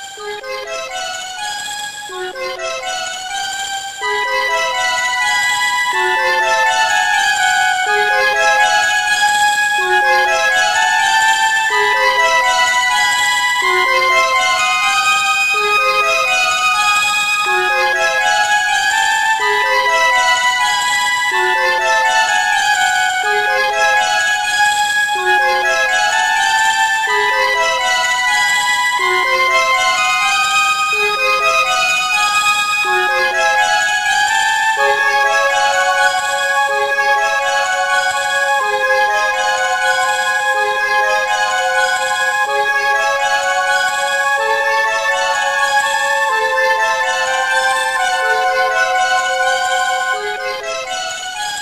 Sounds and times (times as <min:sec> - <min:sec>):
Music: 0:00.0 - 0:51.6.